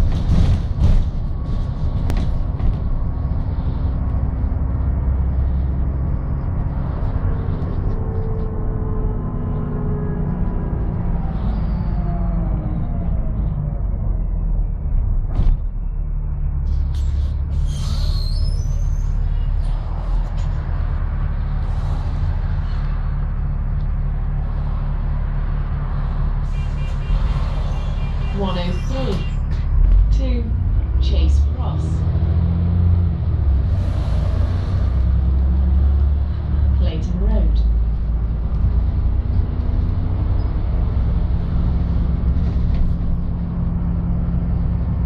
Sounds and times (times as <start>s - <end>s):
Bus: 0.0s - 45.0s
Speech: 28.4s - 29.4s, 30.1s - 32.0s, 36.8s - 37.7s.